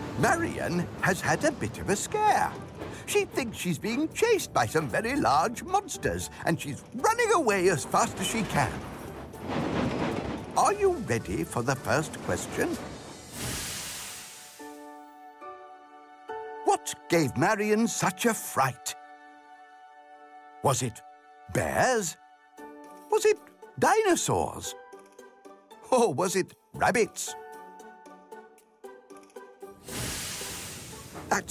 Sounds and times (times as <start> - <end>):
Music: 0.0 - 31.5
Speech: 0.2 - 8.8, 10.6 - 12.8, 16.7 - 19.0, 20.6 - 22.2, 23.1 - 24.8, 25.9 - 27.4.